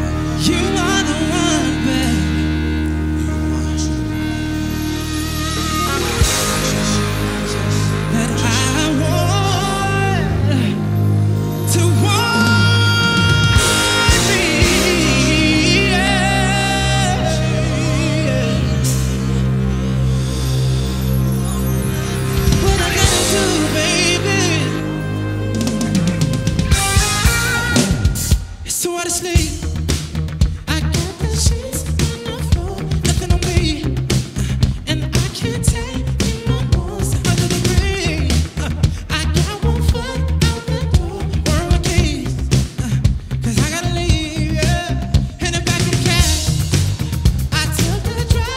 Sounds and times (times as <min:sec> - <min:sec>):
Electric guitar: 0:00.0 - 0:48.5.